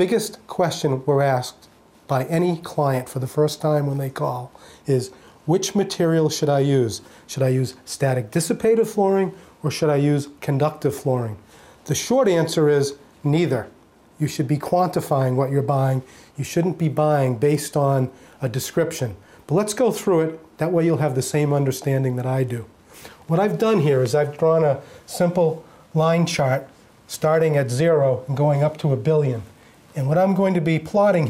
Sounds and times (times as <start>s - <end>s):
Speech: 0.0s - 22.7s, 23.3s - 31.3s.